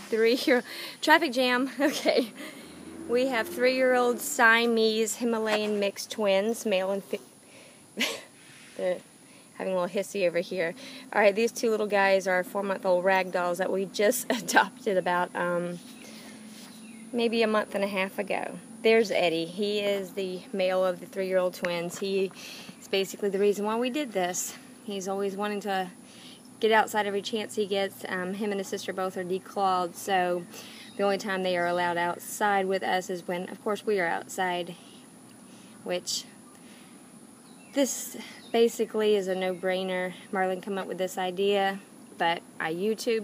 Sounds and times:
Speech: 0.0 - 2.3, 3.1 - 7.2, 8.8 - 9.0, 9.6 - 15.8, 17.2 - 26.0, 26.6 - 34.8, 35.9 - 36.3, 37.8 - 43.2.

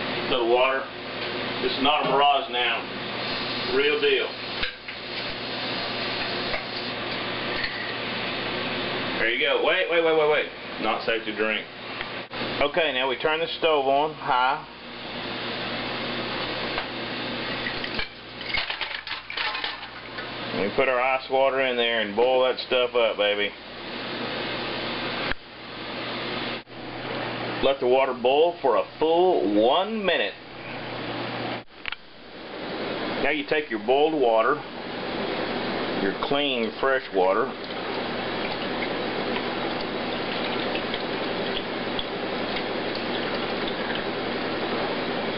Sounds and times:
Speech: 0.3 - 0.9, 1.6 - 2.9, 3.7 - 4.4, 9.2 - 11.7, 12.6 - 14.7, 20.5 - 23.6, 27.6 - 30.4, 33.2 - 34.7, 36.0 - 37.6.

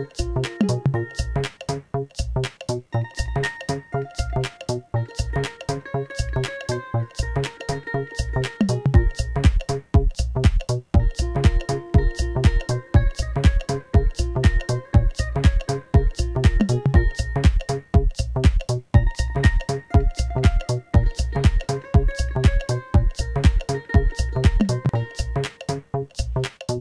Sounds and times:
Techno: 8.2 - 26.5.

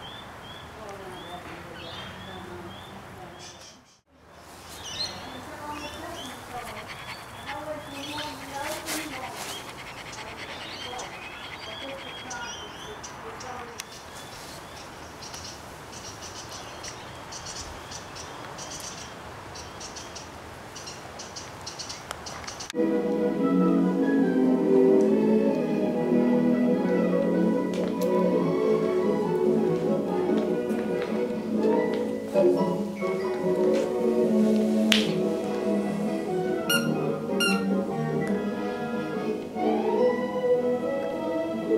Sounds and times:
Bird: 0.0 - 22.7
Speech: 0.8 - 3.9, 5.0 - 9.6, 10.2 - 13.8
Dog: 5.8 - 12.9, 36.7 - 37.7.

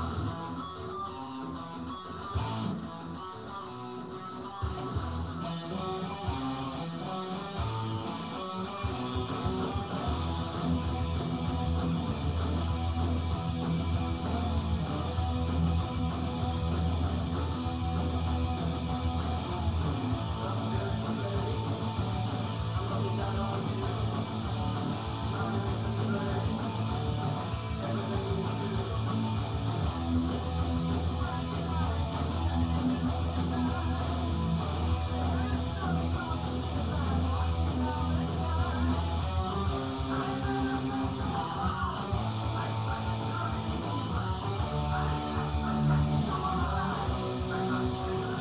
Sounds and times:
Electric guitar: 0.0 - 48.4.

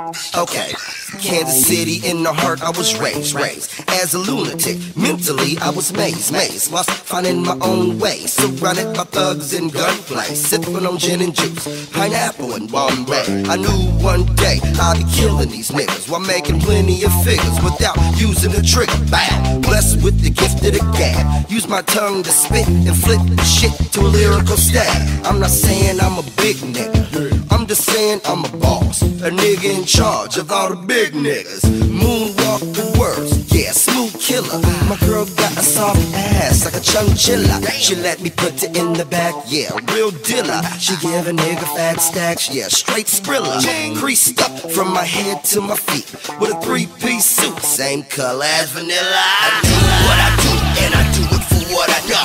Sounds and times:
Pop music: 0.0 - 52.2.

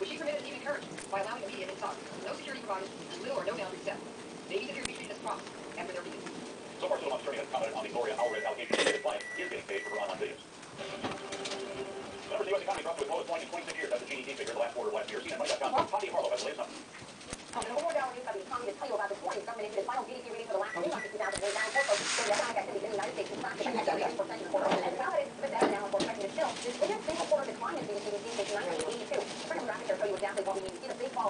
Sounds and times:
Speech: 0.0 - 6.2, 12.3 - 16.8, 17.5 - 31.2.

